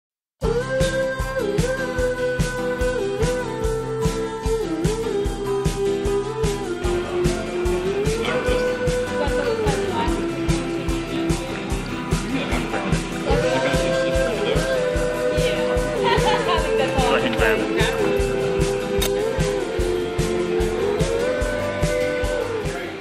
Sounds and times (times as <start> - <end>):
Independent music: 0.4 - 23.0
Speech: 8.2 - 10.3, 12.2 - 18.2.